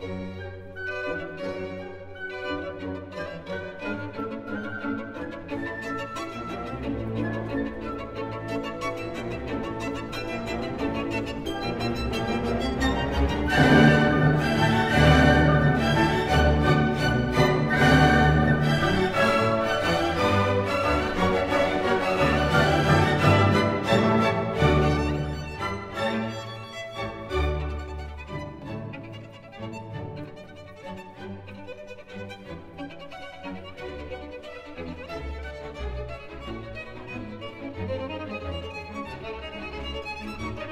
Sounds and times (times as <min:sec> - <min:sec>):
Violin, fiddle: 0:00.0 - 0:40.7.